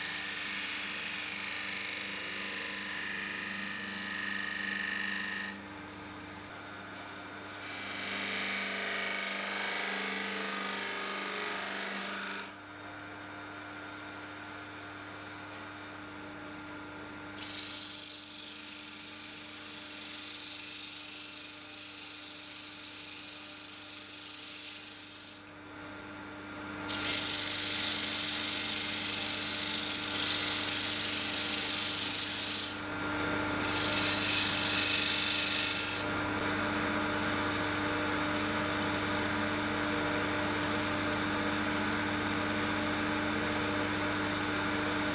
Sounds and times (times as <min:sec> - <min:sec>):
Tools: 0:17.4 - 0:25.4, 0:27.0 - 0:32.8, 0:33.6 - 0:44.0.